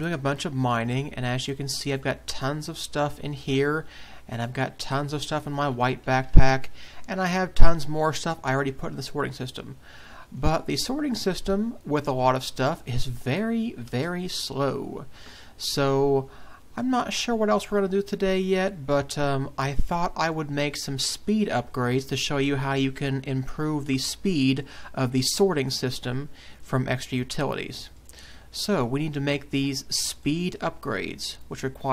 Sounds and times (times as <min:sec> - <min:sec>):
Speech: 0:00.0 - 0:31.9.